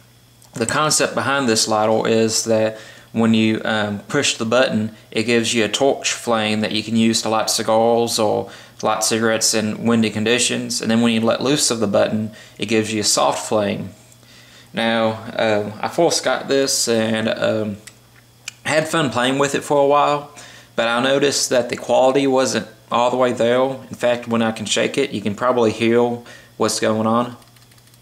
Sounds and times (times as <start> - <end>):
Inside, small room: 0.0 - 28.0
Speech: 0.6 - 14.0, 14.8 - 17.9, 18.5 - 27.5.